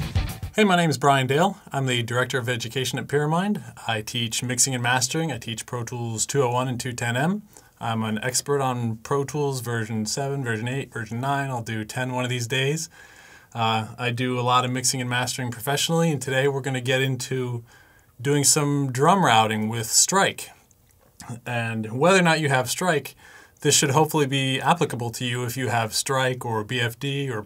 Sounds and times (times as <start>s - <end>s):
Speech: 0.6s - 12.9s, 13.6s - 20.6s, 21.2s - 27.4s.